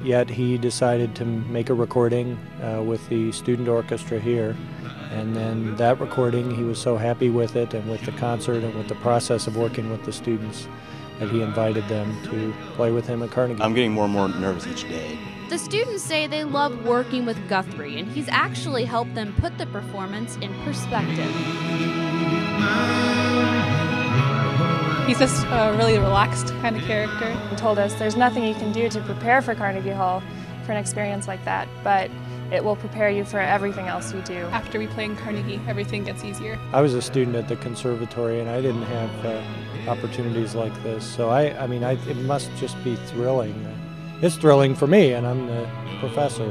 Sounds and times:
Speech: 0:00.0 - 0:21.4, 0:25.1 - 0:46.5.

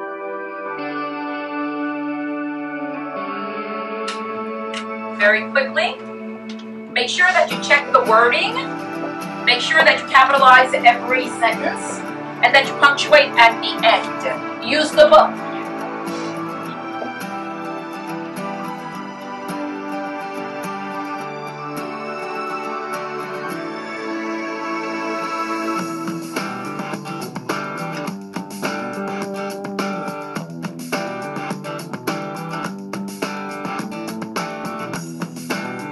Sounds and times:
Music: 0:00.0 - 0:35.9
Speech: 0:05.2 - 0:06.0, 0:06.9 - 0:08.7, 0:09.5 - 0:16.3.

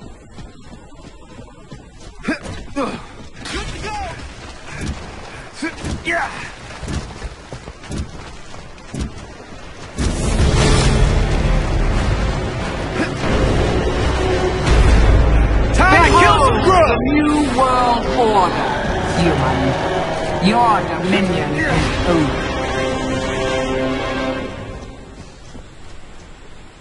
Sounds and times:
Music: 0:10.3 - 0:25.2.

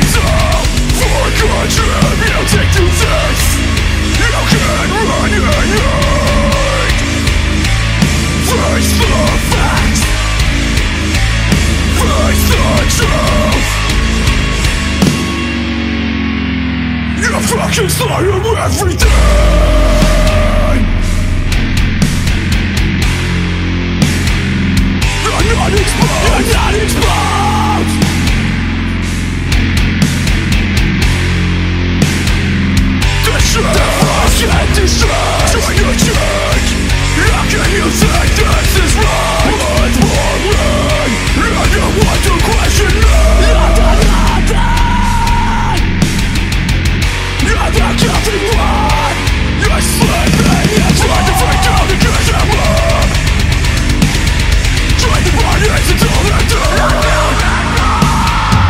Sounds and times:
Angry music: 0:00.0 - 0:58.7.

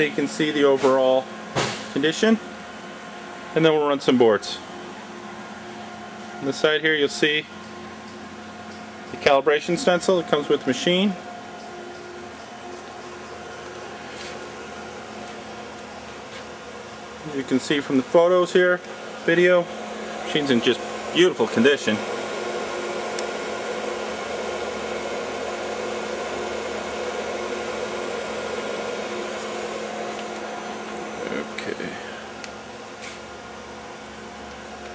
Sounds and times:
Speech: 0:00.0 - 0:01.3, 0:01.9 - 0:02.4, 0:03.6 - 0:04.6, 0:06.4 - 0:07.5, 0:09.1 - 0:11.2, 0:17.2 - 0:19.7, 0:20.3 - 0:22.1, 0:31.2 - 0:32.2.

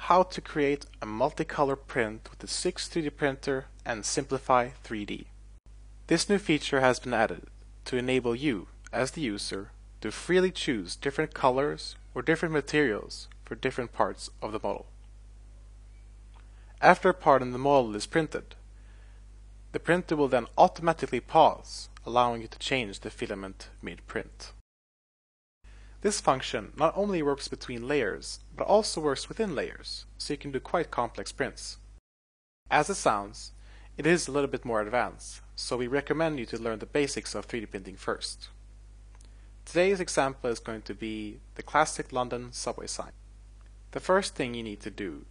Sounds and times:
Speech: 0:00.0 - 0:05.3, 0:06.1 - 0:14.9, 0:16.8 - 0:18.6, 0:19.8 - 0:24.6, 0:26.0 - 0:31.8, 0:32.7 - 0:38.6, 0:39.7 - 0:43.2, 0:43.9 - 0:45.3.

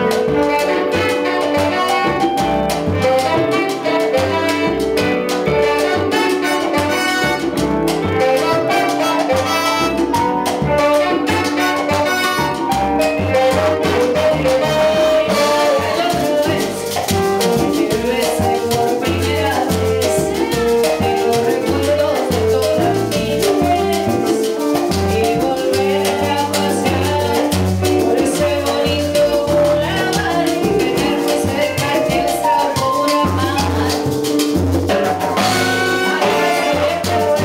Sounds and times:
Salsa music: 0:00.0 - 0:37.4.

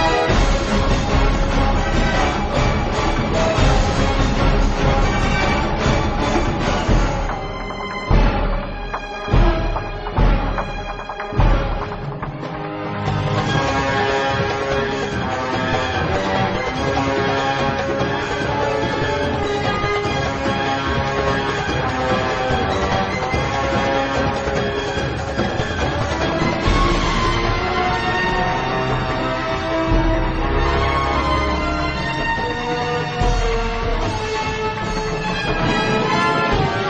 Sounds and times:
Background music: 0:00.0 - 0:36.9.

